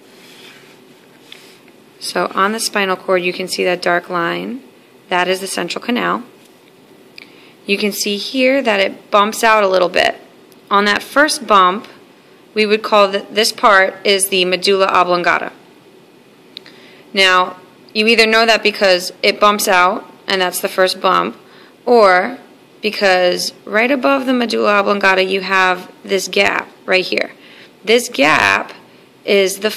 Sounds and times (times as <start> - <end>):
Speech: 2.0 - 6.3, 7.7 - 12.0, 12.6 - 15.6, 17.2 - 29.7.